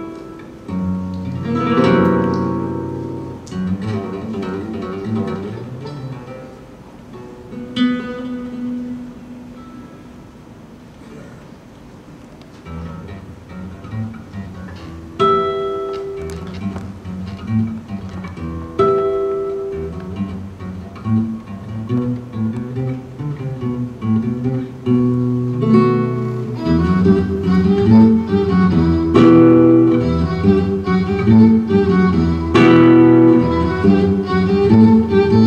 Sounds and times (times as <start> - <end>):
Flamenco: 0.0 - 35.4
Violin, fiddle: 26.6 - 35.4.